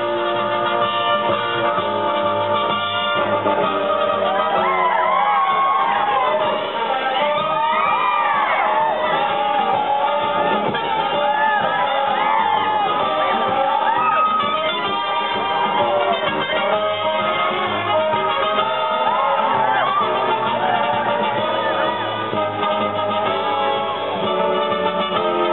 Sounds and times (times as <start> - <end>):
Music: 0.0 - 25.5
Whoop: 4.2 - 16.2, 18.6 - 22.1.